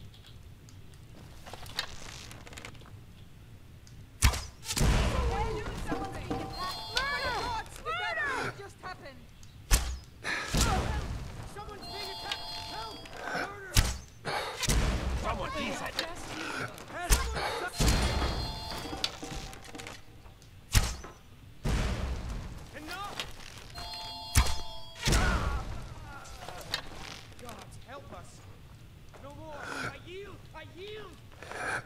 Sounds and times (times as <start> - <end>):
Speech: 15.2 - 17.8, 29.2 - 31.2.